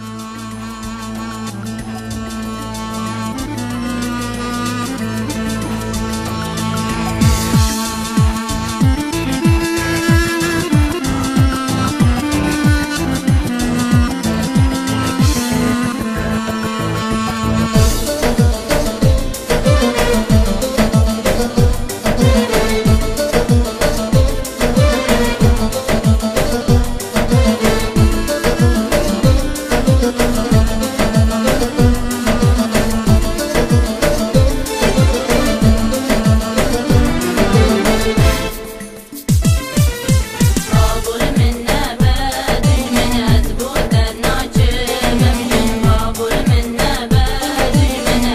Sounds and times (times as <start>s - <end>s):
Music: 0.0s - 48.3s.